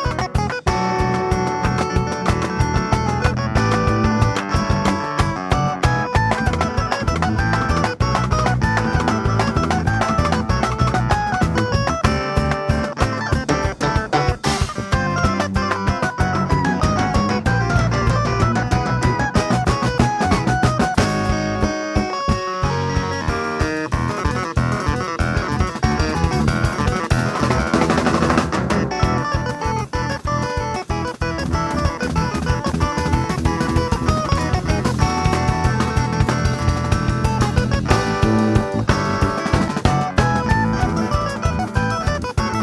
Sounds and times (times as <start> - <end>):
Music: 0.0 - 42.6.